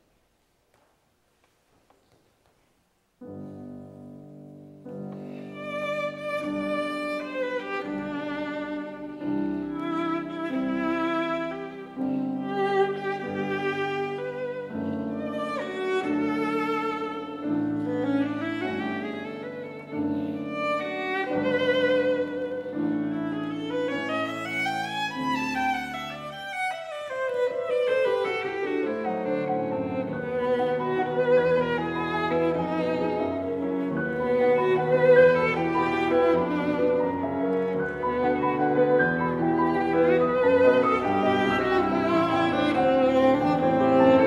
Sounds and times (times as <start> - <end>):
Violin, fiddle: 4.9 - 44.2.